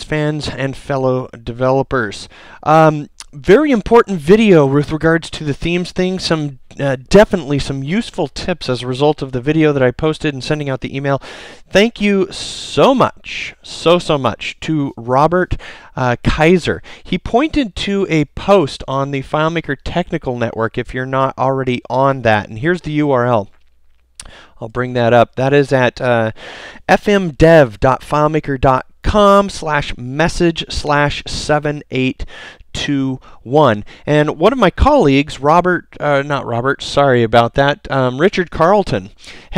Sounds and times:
Speech: 0:00.0 - 0:23.6, 0:24.2 - 0:39.5.

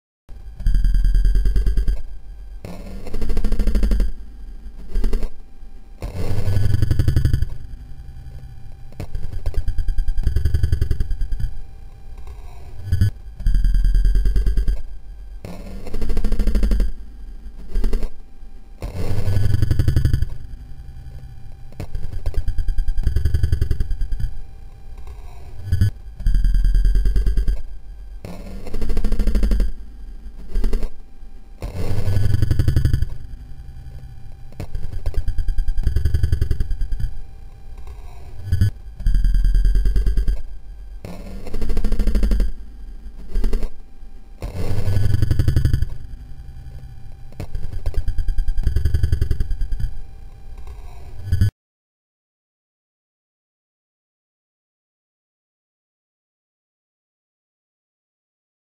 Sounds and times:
Sound effect: 0:00.3 - 0:05.4, 0:06.0 - 0:18.2, 0:18.8 - 0:31.0, 0:31.6 - 0:43.8, 0:44.4 - 0:51.5.

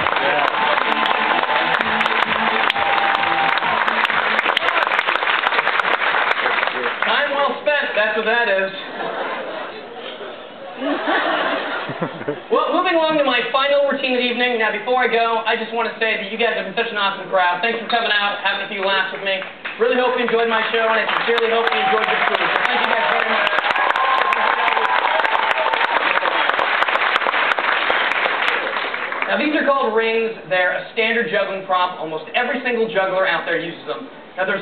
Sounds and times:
Speech: 0:06.8 - 0:08.9, 0:12.5 - 0:23.5, 0:29.3 - 0:34.6.

